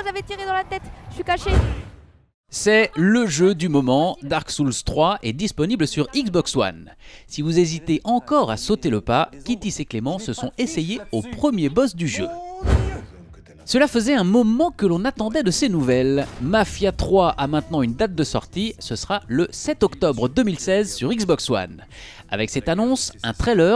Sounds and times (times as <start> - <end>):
Speech: 2.5 - 23.7
Music: 12.4 - 15.0, 15.6 - 23.7.